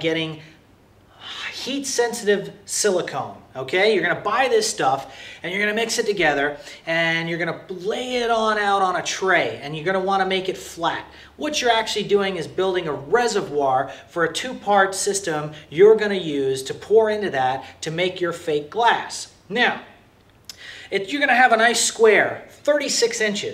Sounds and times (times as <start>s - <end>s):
Speech: 0.0s - 0.6s, 1.2s - 20.0s, 20.9s - 23.5s
Inside, small room: 0.0s - 23.5s.